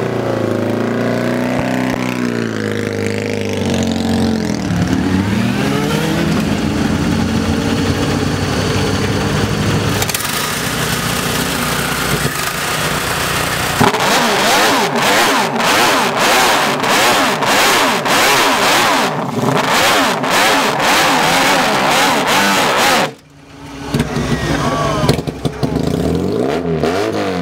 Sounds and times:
Motorcycle: 0.0 - 27.4
Outside, urban or manmade: 0.0 - 27.4
Idling: 6.4 - 13.9.

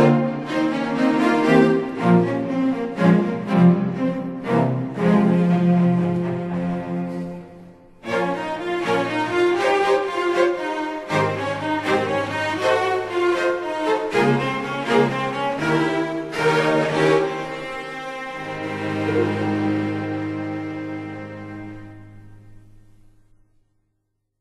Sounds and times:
Cello: 0.0 - 23.8.

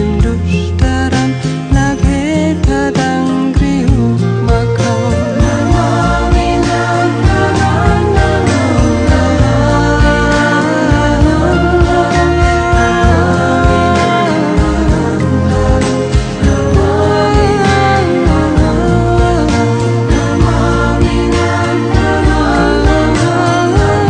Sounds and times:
Music: 0.0 - 24.0.

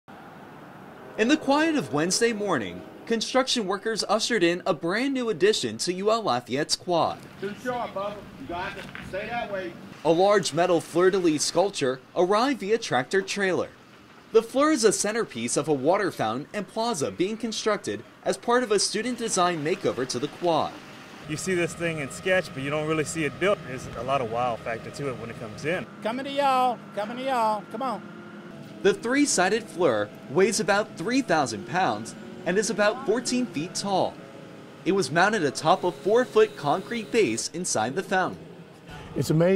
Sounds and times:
Vehicle: 0.0 - 39.5
Speech: 1.2 - 13.7, 14.4 - 28.0, 28.9 - 34.2, 34.9 - 38.4, 39.1 - 39.5.

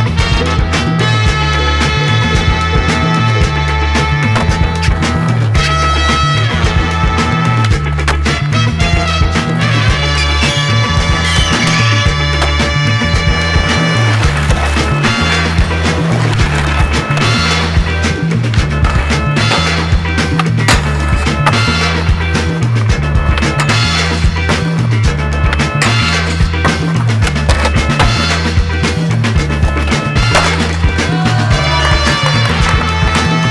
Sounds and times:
Music: 0.0 - 33.5
Skateboard: 0.2 - 33.5.

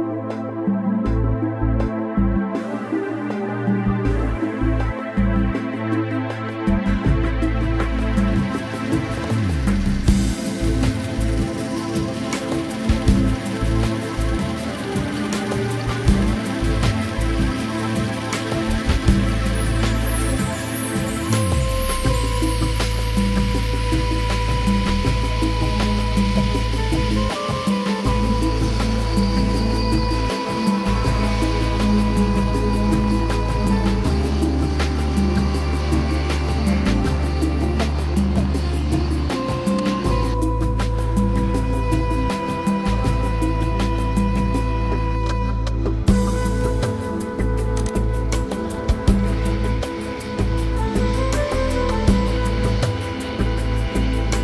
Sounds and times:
Music: 0.0 - 54.4.

